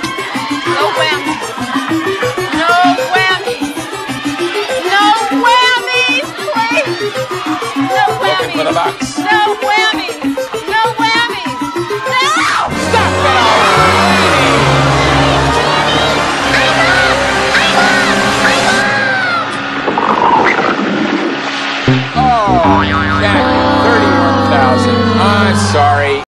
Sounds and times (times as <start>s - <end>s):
Hubbub, speech noise, speech babble: 0.0s - 19.7s
Music: 0.0s - 26.2s
Sound effect: 17.0s - 26.1s
Speech: 22.2s - 26.2s.